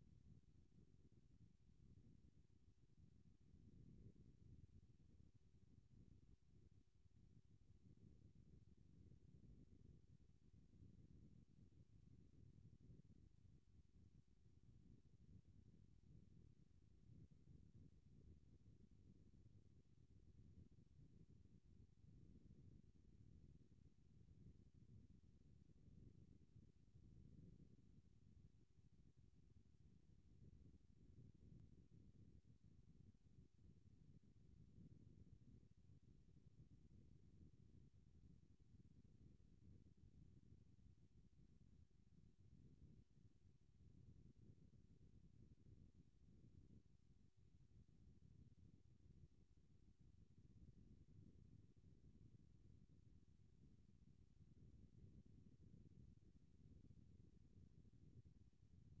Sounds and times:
Silence: 0.0 - 59.0.

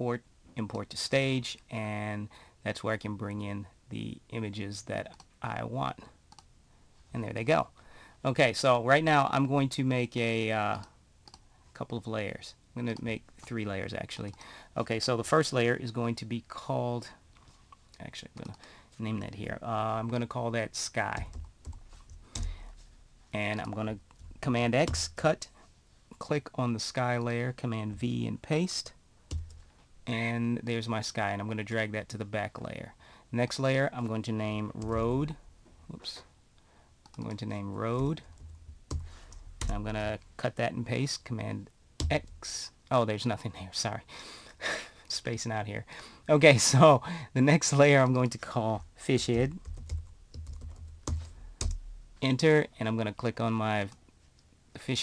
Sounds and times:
Speech: 0.0 - 6.2, 7.1 - 10.9, 11.8 - 17.2, 18.0 - 21.4, 23.3 - 25.5, 26.1 - 29.0, 30.0 - 36.3, 37.2 - 38.3, 39.6 - 44.1, 45.1 - 49.6, 52.2 - 54.0, 54.7 - 55.0.

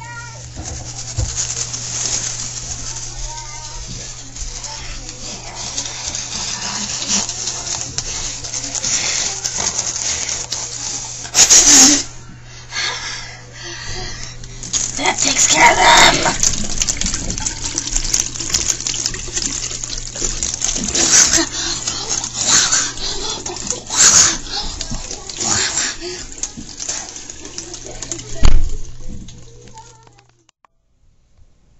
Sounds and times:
Water: 0.0 - 11.9, 14.5 - 30.5
Water tap, faucet: 0.0 - 12.1, 14.5 - 30.2
Sink (filling or washing): 0.0 - 12.2, 13.9 - 30.2.

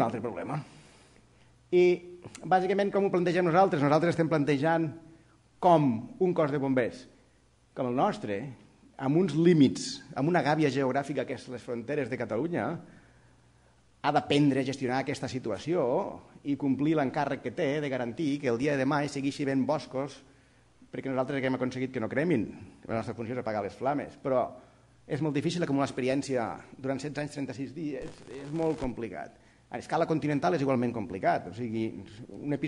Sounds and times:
Speech: 0.0 - 0.7, 1.7 - 5.0, 5.6 - 7.2, 7.8 - 12.9, 14.0 - 20.3, 20.9 - 32.6.

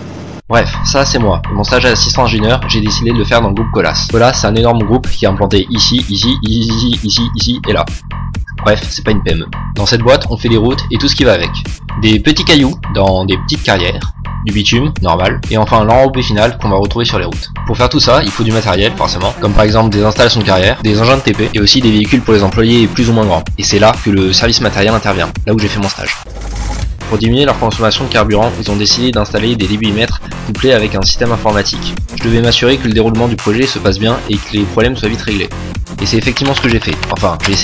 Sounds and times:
Speech: 0.5 - 7.9, 8.5 - 26.3, 27.1 - 37.6
Music: 0.5 - 37.6.

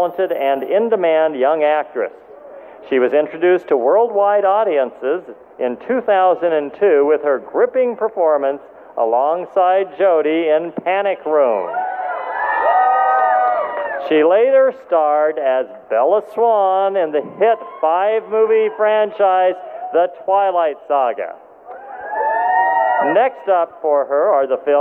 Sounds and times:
Male speech, man speaking: 0.0 - 2.1, 2.8 - 11.7, 14.0 - 21.4, 23.0 - 24.8
Narration, monologue: 0.0 - 11.7, 14.0 - 21.7, 23.0 - 24.8.

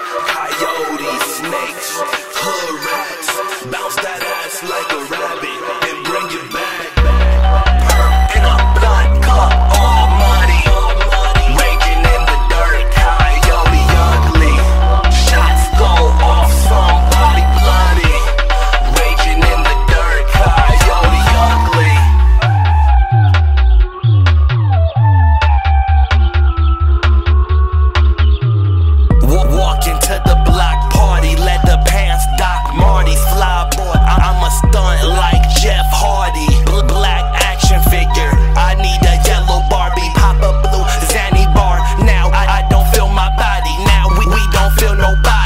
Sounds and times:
Music: 0.0 - 45.4.

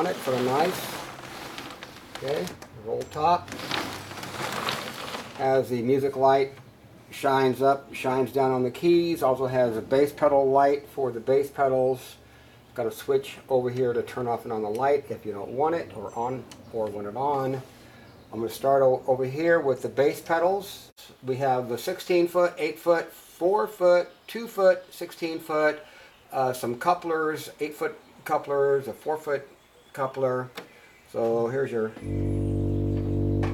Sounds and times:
Speech: 0.0 - 1.0, 2.2 - 3.5, 5.4 - 12.2, 12.8 - 17.7, 18.3 - 32.1.

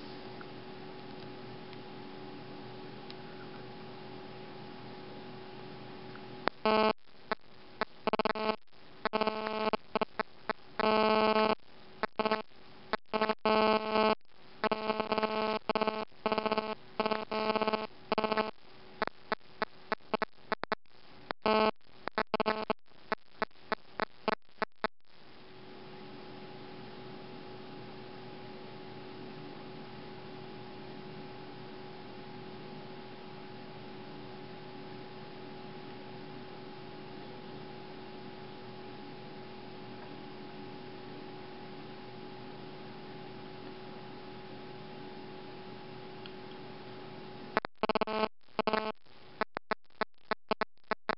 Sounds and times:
Telephone: 6.5 - 7.0, 8.0 - 10.2, 10.8 - 20.8, 47.6 - 49.6.

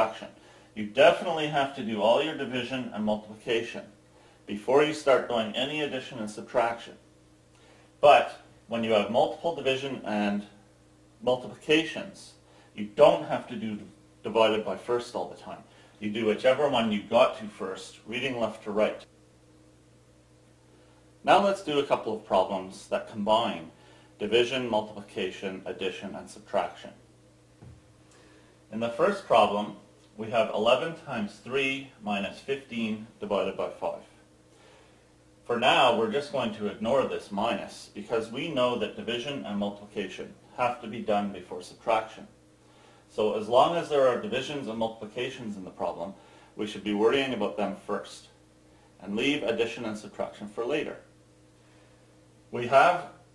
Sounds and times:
Speech: 0.0 - 7.0, 8.0 - 10.6, 11.2 - 19.1, 21.2 - 27.0, 28.7 - 34.2, 35.5 - 42.4, 43.1 - 48.4, 49.0 - 51.1, 52.5 - 53.2.

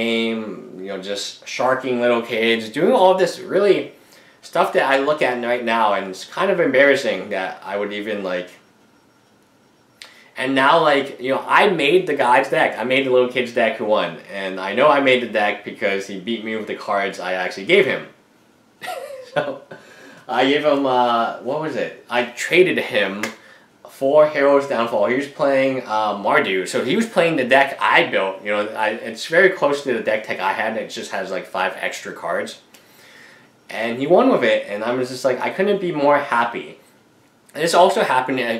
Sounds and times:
Speech: 0.0 - 8.6, 10.4 - 18.2, 20.3 - 32.7, 33.7 - 36.8, 37.5 - 38.5
Inside, small room: 0.0 - 38.5.

